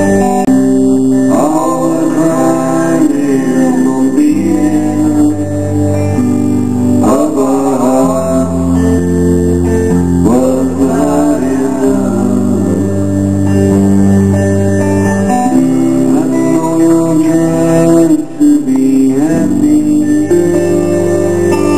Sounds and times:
Bass guitar: 0.0s - 21.7s.

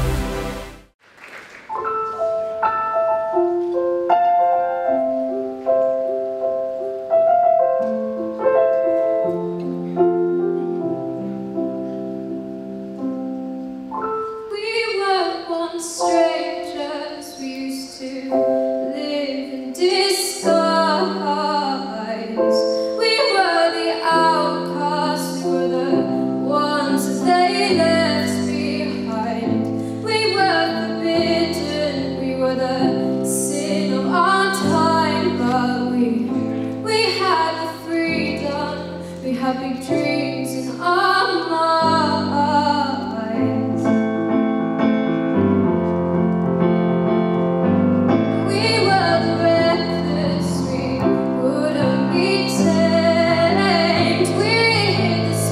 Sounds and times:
Music: 0.0s - 1.0s, 1.6s - 55.5s
Female singing: 14.5s - 43.9s, 48.4s - 55.5s.

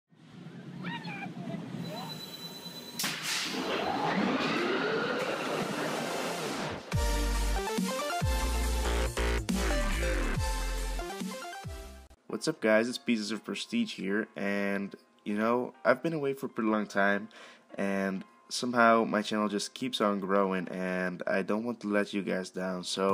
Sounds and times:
Music: 6.9s - 21.3s.

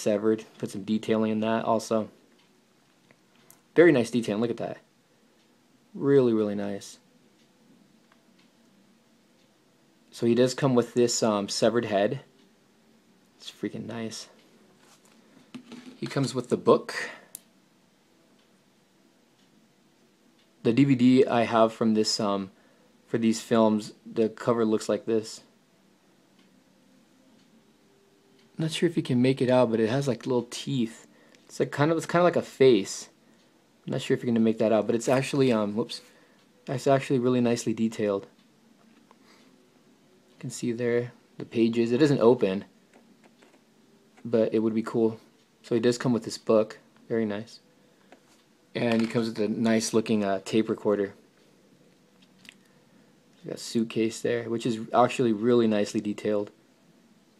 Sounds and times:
Speech: 0.0s - 2.2s, 3.8s - 4.9s, 5.9s - 7.1s, 10.1s - 12.3s, 13.4s - 14.4s, 16.0s - 17.3s, 20.6s - 25.5s, 28.6s - 33.2s, 33.9s - 36.1s, 36.7s - 38.4s, 40.4s - 42.8s, 44.2s - 47.7s, 48.7s - 51.2s, 53.4s - 56.6s
Inside, small room: 0.0s - 57.3s.

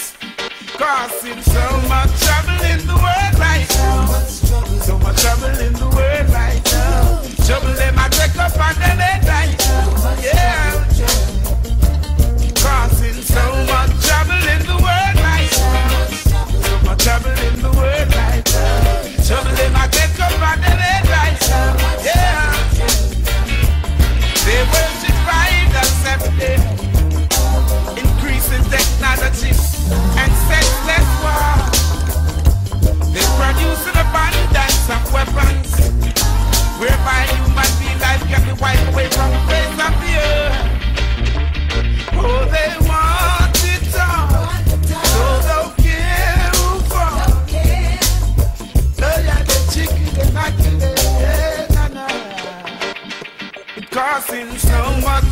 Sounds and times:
Reggae: 0.0s - 55.3s.

